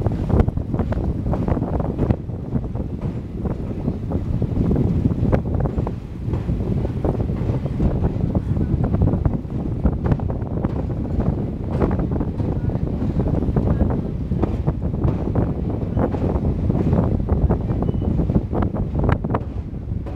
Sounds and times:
Railroad car, train wagon: 0:00.0 - 0:20.1
Train: 0:00.0 - 0:20.1
Clickety-clack: 0:00.2 - 0:02.3, 0:02.9 - 0:03.8, 0:04.9 - 0:09.1, 0:09.9 - 0:13.8, 0:14.4 - 0:20.1.

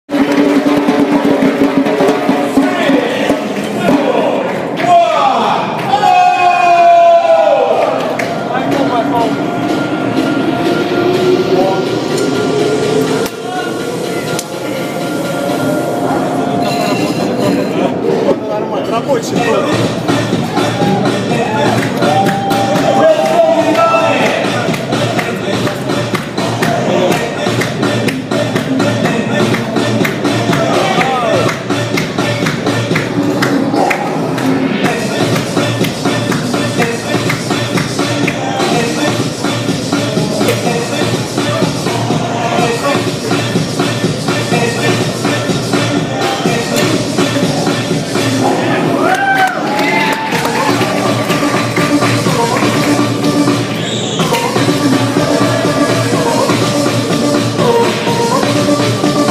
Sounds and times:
Music: 0:00.0 - 0:59.3
Speech: 0:08.5 - 0:09.4, 0:17.4 - 0:19.9.

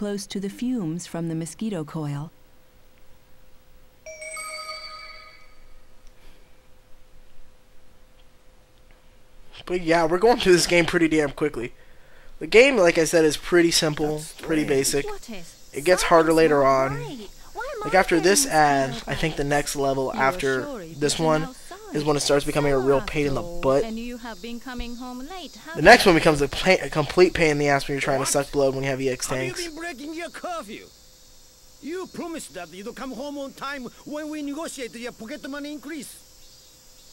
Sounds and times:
Speech: 0:00.0 - 0:02.3, 0:09.6 - 0:11.7, 0:12.4 - 0:30.9, 0:31.8 - 0:36.2.

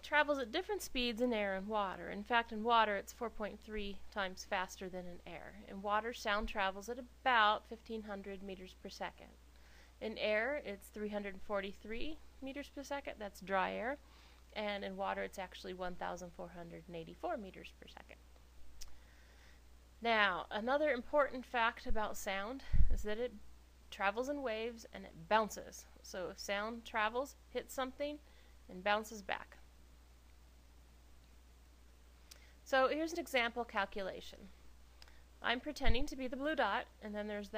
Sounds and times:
Speech: 0:00.0 - 0:09.4, 0:10.0 - 0:14.0, 0:14.6 - 0:18.2, 0:20.0 - 0:29.6, 0:32.7 - 0:34.5, 0:35.4 - 0:37.5.

